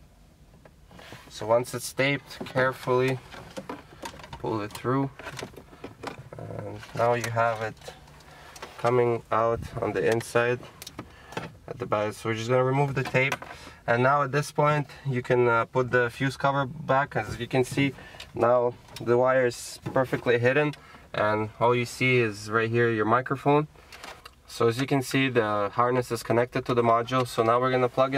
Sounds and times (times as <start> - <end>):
Car: 0.0 - 28.1
Speech: 1.3 - 3.2, 4.4 - 5.2, 6.3 - 8.0, 8.8 - 10.6, 11.7 - 23.7, 24.5 - 28.1.